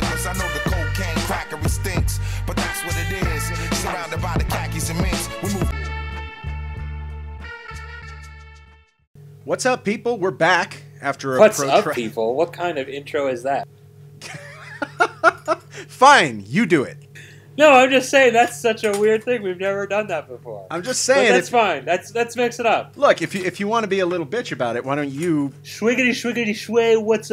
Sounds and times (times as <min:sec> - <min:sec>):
Speech: 0:09.5 - 0:13.6, 0:15.9 - 0:17.0, 0:17.6 - 0:27.3.